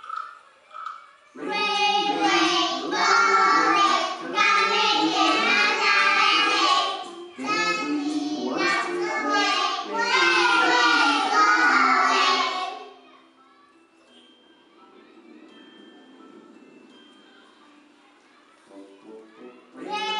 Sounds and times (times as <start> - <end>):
Music: 0.0 - 20.1
Speech: 0.4 - 16.0, 17.2 - 20.1.